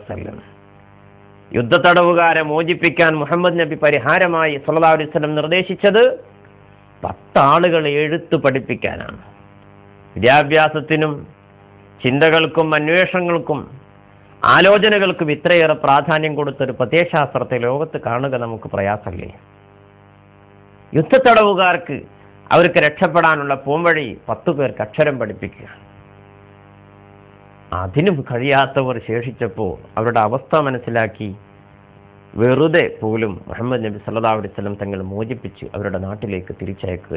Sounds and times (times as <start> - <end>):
Male speech, man speaking: 0.0 - 0.4, 1.5 - 6.3, 7.0 - 9.3, 10.2 - 11.4, 12.0 - 13.8, 14.4 - 19.4, 21.0 - 25.8, 27.8 - 31.4, 32.4 - 37.1
Narration, monologue: 0.0 - 37.1.